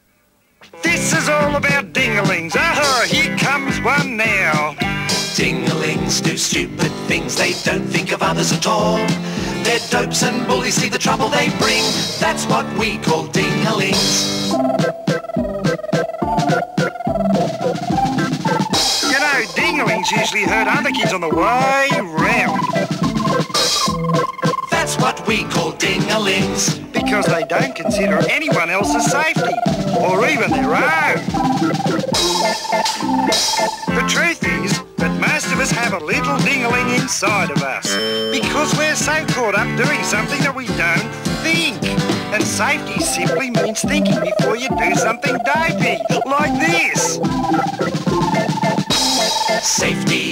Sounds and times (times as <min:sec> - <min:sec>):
Music: 0:00.0 - 0:50.3
Speech: 0:00.8 - 0:04.8, 0:19.1 - 0:22.6, 0:25.8 - 0:31.3, 0:33.9 - 0:47.2.